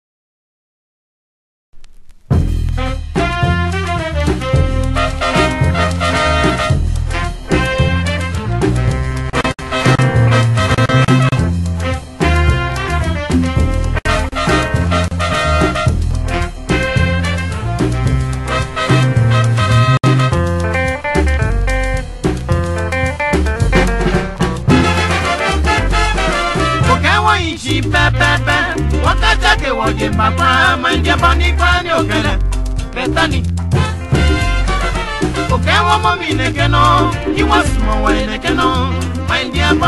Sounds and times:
Music: 2.3s - 39.8s.

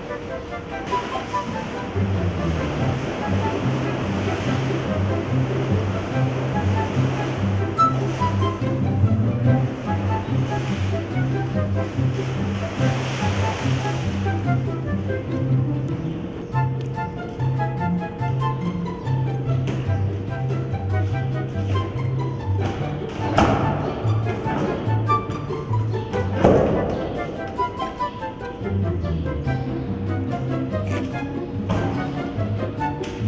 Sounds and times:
Music: 0.0s - 33.2s.

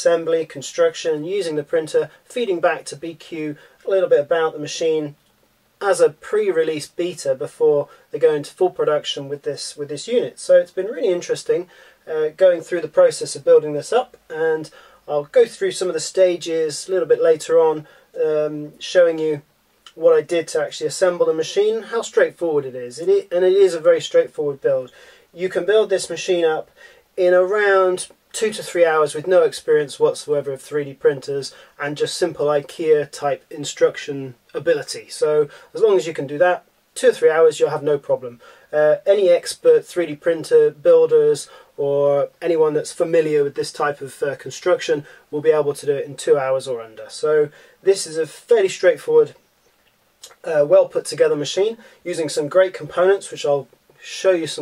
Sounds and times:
Speech: 0.0s - 5.2s, 5.8s - 49.4s, 50.2s - 54.6s.

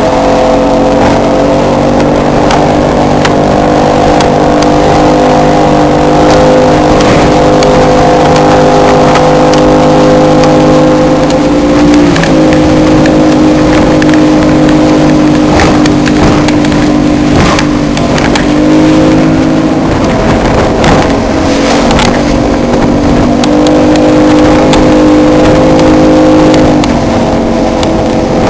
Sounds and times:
Motorboat, speedboat: 0.0s - 28.5s.

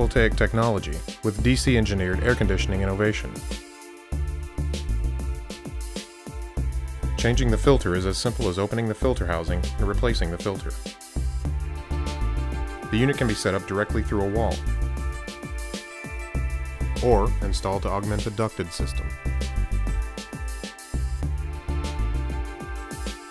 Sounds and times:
Speech: 0.0s - 3.4s, 7.2s - 10.8s, 12.9s - 14.6s, 17.0s - 19.1s
Music: 0.0s - 23.3s.

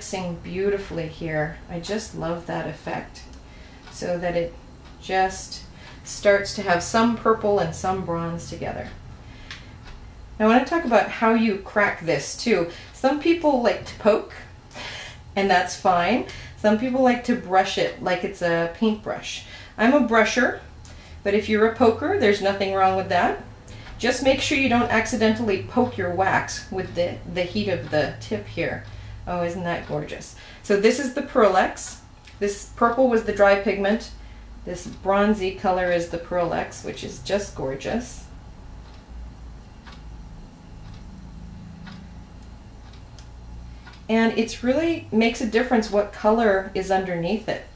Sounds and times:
Speech: 0.0s - 3.3s, 3.9s - 9.0s, 10.4s - 14.5s, 15.4s - 38.3s, 44.1s - 47.7s.

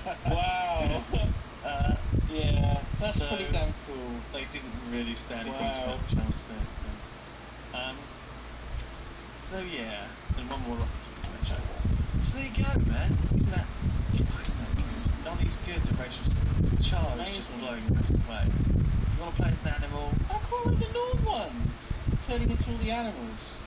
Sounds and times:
Speech: 2.3s - 7.0s, 9.5s - 18.5s.

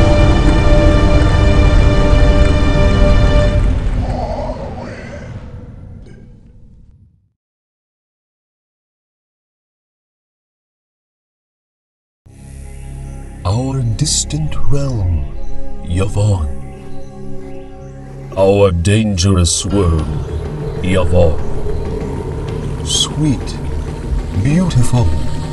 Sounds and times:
Music: 0.0s - 4.6s, 12.3s - 25.5s
Speech: 13.5s - 15.3s, 15.9s - 16.6s, 18.4s - 20.2s, 20.8s - 21.4s, 22.9s - 23.6s, 24.4s - 25.3s.

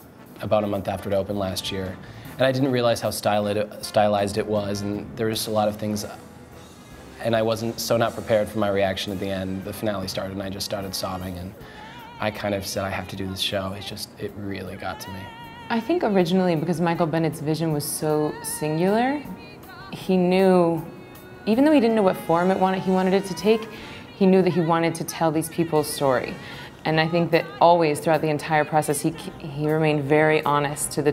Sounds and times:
Music: 0.0s - 31.1s
Speech: 0.4s - 6.2s, 7.2s - 11.6s, 12.2s - 19.3s, 20.0s - 20.9s, 21.5s - 31.1s.

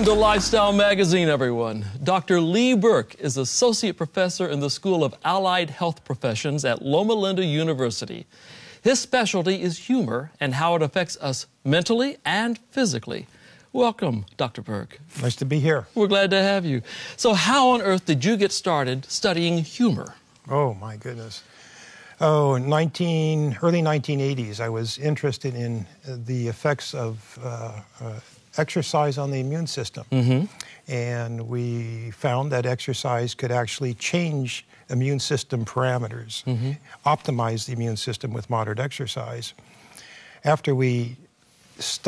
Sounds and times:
Speech: 8.9s - 21.4s, 22.2s - 39.6s, 40.5s - 41.2s.

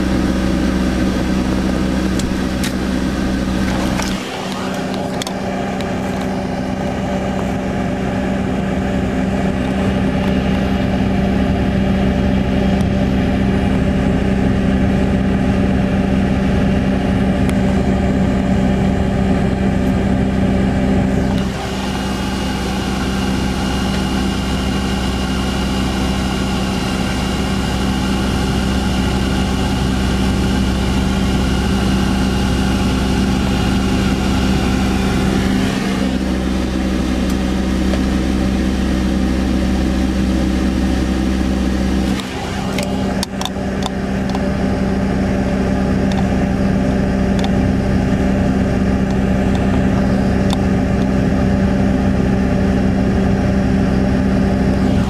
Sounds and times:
Car: 0.0s - 55.1s.

